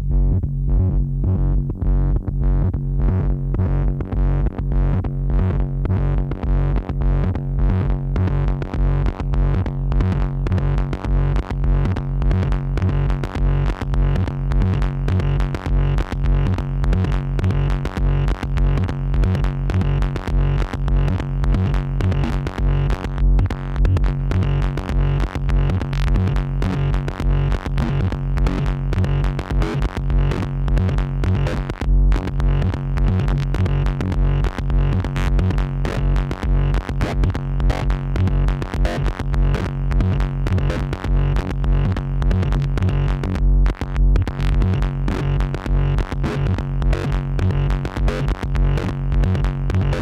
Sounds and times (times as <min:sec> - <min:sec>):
Electronic music: 0:00.0 - 0:50.0.